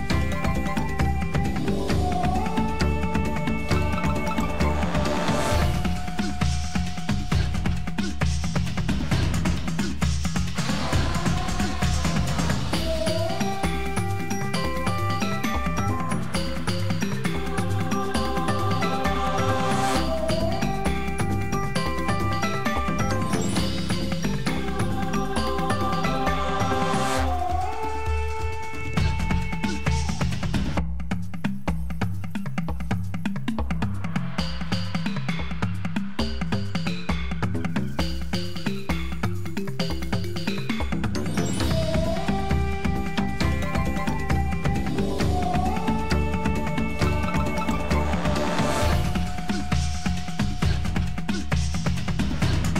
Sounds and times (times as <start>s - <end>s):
Music: 0.0s - 52.7s.